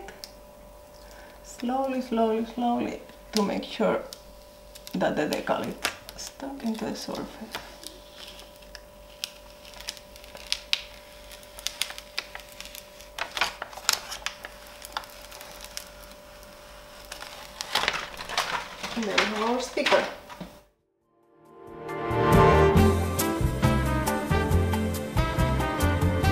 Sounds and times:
Inside, small room: 0.0s - 26.3s
Speech: 1.5s - 4.1s, 4.9s - 7.7s, 19.0s - 20.2s.

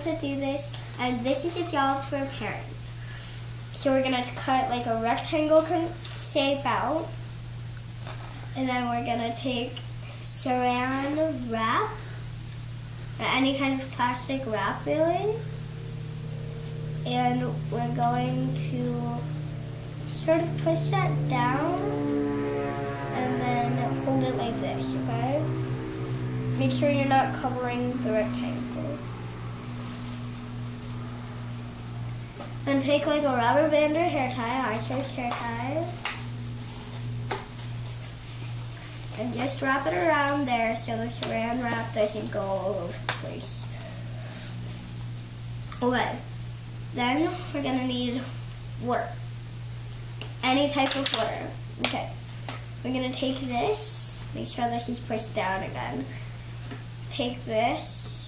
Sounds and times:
Speech: 0.0s - 2.7s, 3.8s - 7.1s, 8.6s - 12.0s, 13.2s - 15.4s, 17.1s - 19.3s, 20.1s - 21.9s, 23.2s - 25.5s, 26.6s - 29.0s, 32.7s - 36.0s, 39.2s - 43.7s, 45.8s - 46.3s, 47.0s - 49.2s, 50.4s - 52.2s, 52.8s - 56.2s, 57.1s - 58.2s.

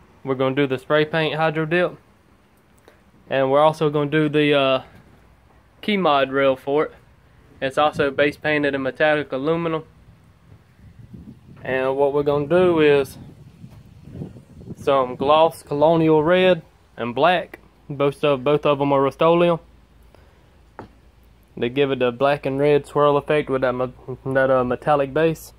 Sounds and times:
Speech: 0.2s - 2.0s, 3.3s - 5.0s, 5.8s - 7.0s, 7.6s - 9.9s, 11.6s - 13.2s, 14.8s - 19.7s, 21.6s - 25.5s.

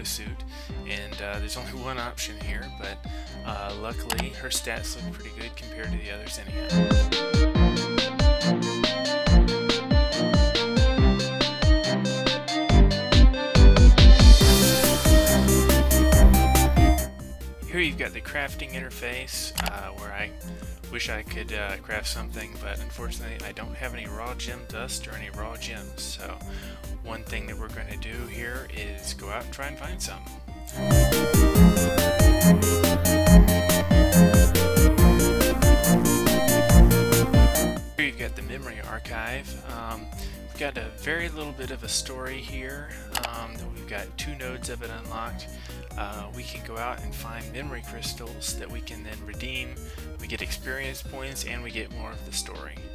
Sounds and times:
Speech: 0.0s - 6.6s, 17.6s - 30.2s, 38.0s - 52.9s
Music: 0.0s - 52.9s.

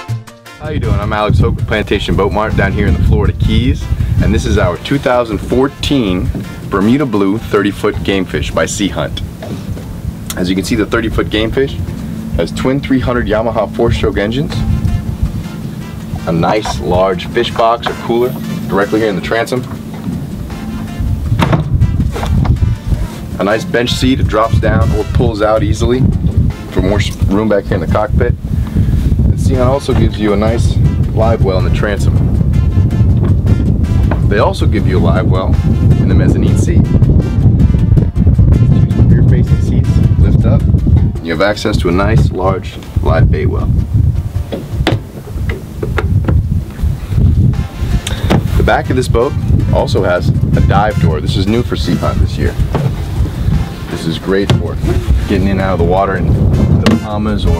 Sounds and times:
Music: 0.0s - 57.5s
Speech: 0.6s - 9.2s, 10.3s - 11.8s, 12.4s - 14.6s, 16.2s - 19.7s, 23.4s - 26.1s, 26.7s - 28.4s, 29.3s - 32.2s, 34.3s - 36.9s, 38.9s - 43.8s, 48.6s - 52.6s, 53.9s - 56.3s, 56.9s - 57.5s
Motorboat, speedboat: 1.7s - 57.5s.

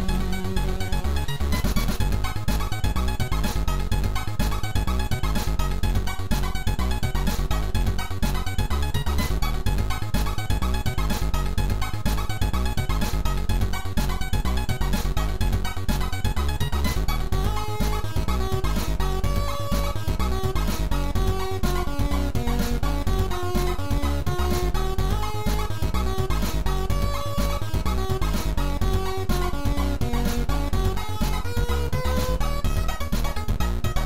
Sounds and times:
Soundtrack music: 0.0s - 34.0s.

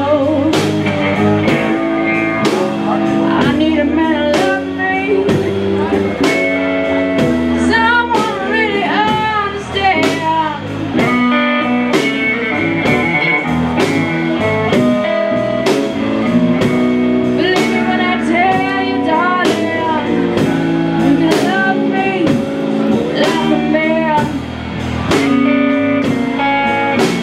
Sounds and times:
Music: 0.0s - 27.2s.

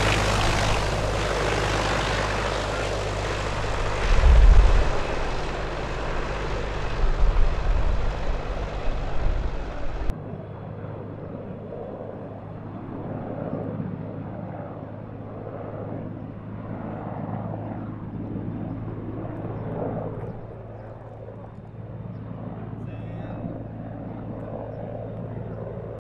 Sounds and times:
Helicopter: 0.0s - 26.0s.

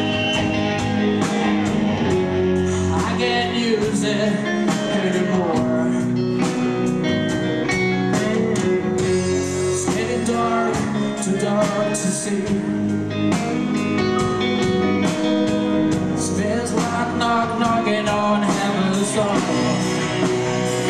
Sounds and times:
Music: 0.0s - 20.9s.

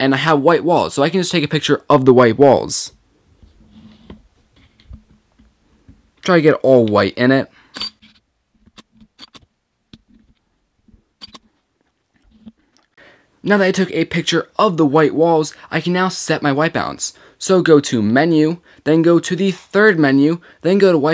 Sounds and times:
Speech: 0.0s - 3.0s, 6.2s - 7.5s, 13.4s - 21.1s.

